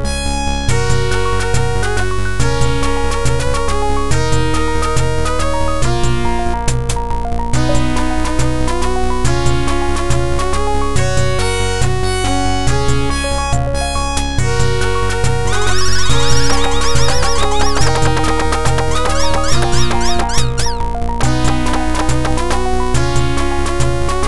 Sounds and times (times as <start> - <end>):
Music: 0.0 - 24.2.